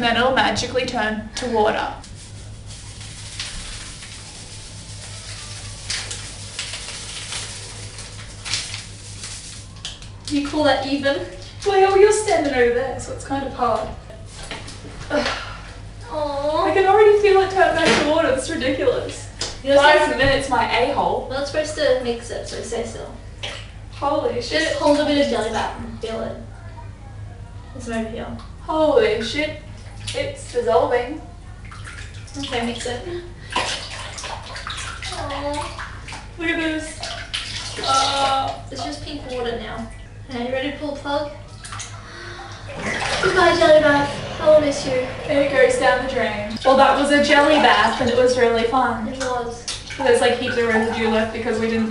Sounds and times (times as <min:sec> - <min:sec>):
Bathtub (filling or washing): 0:00.0 - 0:27.2, 0:27.8 - 0:51.9.